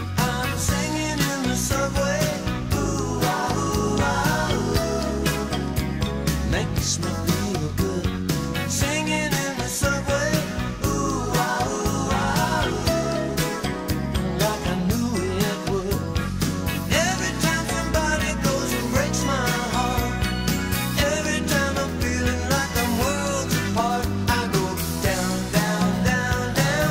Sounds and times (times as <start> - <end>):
Music: 0.0 - 26.9
Male singing: 0.2 - 5.6, 6.5 - 13.6, 14.2 - 16.2, 16.9 - 20.3, 21.0 - 26.9.